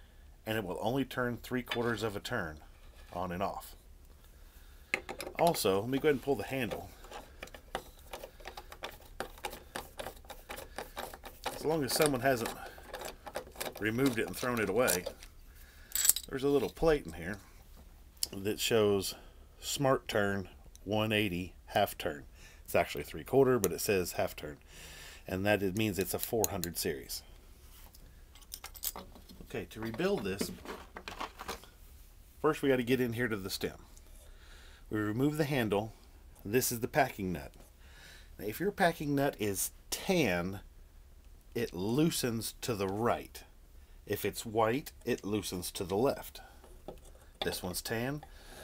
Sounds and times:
Speech: 0.5s - 3.8s, 5.4s - 6.9s, 11.6s - 12.7s, 13.8s - 15.1s, 16.3s - 17.4s, 18.2s - 24.6s, 25.3s - 27.3s, 29.4s - 30.6s, 32.4s - 33.9s, 34.9s - 37.6s, 38.4s - 40.6s, 41.6s - 43.5s, 44.1s - 46.4s, 47.4s - 48.2s.

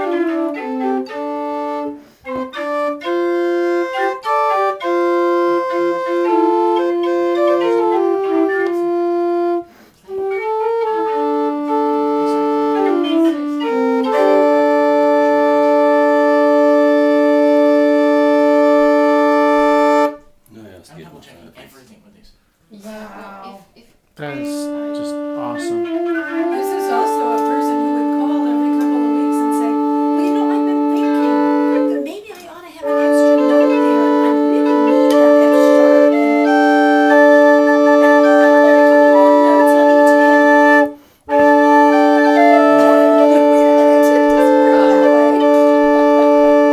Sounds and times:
Organ: 0.0s - 20.2s, 24.4s - 32.0s, 32.8s - 46.7s
Wind instrument, woodwind instrument: 0.0s - 20.4s, 24.2s - 32.2s, 32.8s - 46.7s
Inside, small room: 0.0s - 46.7s.

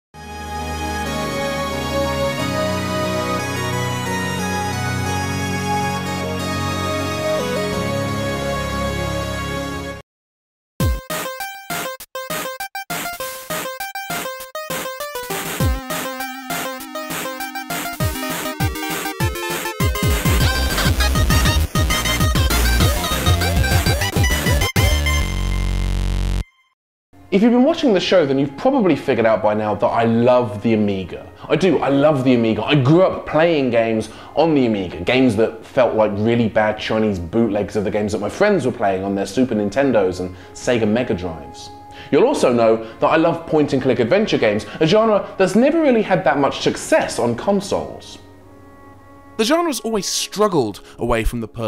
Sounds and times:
Video game music: 0.2s - 10.0s, 10.8s - 27.4s.

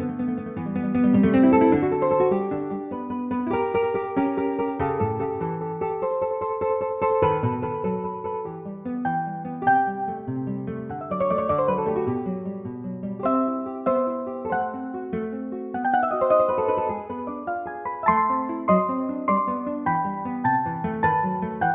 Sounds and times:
Piano: 0.0s - 21.7s.

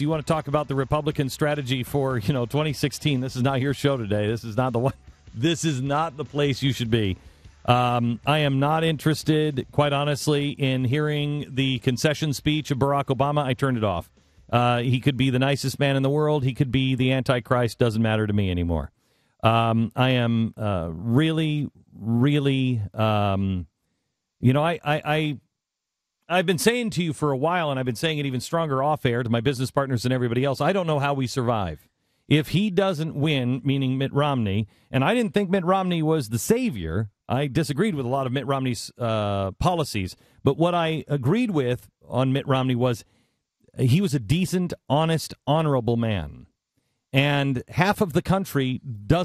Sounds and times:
Speech: 0.0s - 23.7s, 24.4s - 25.4s, 26.3s - 43.0s, 43.8s - 46.5s, 47.2s - 49.2s.

